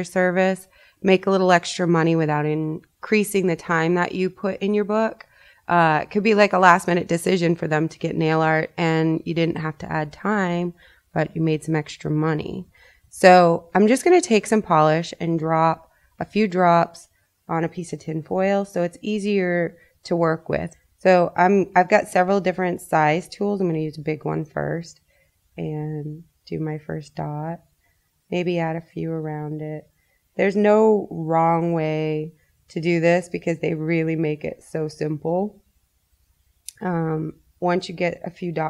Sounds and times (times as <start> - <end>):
Speech: 0.0 - 25.0, 25.6 - 27.6, 28.3 - 35.6, 36.7 - 38.6.